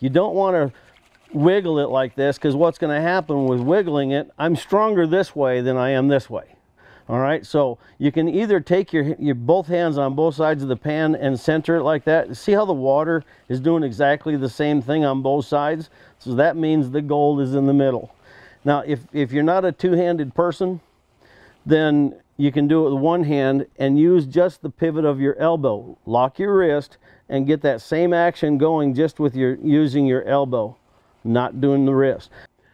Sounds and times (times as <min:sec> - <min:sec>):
Speech: 0:00.0 - 0:20.8, 0:21.6 - 0:32.5.